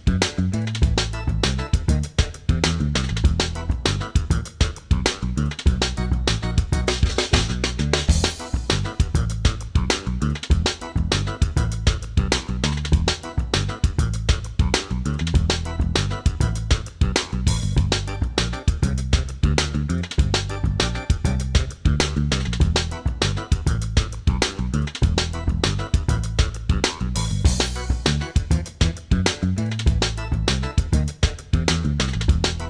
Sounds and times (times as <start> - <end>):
Music: 0.0 - 32.7.